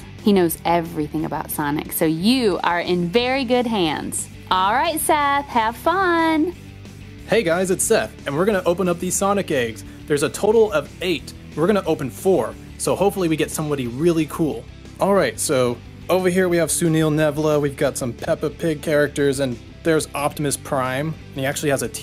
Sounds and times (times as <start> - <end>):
Music: 0.0 - 22.0
Speech: 7.3 - 22.0.